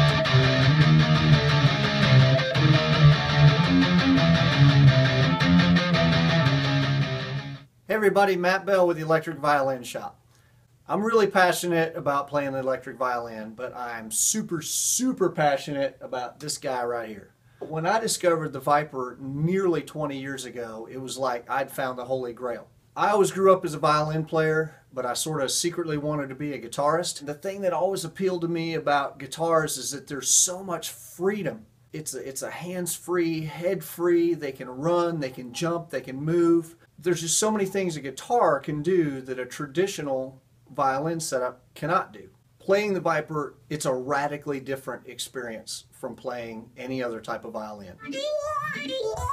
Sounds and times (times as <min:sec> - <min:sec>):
Speech: 0:07.9 - 0:10.2, 0:10.9 - 0:49.3.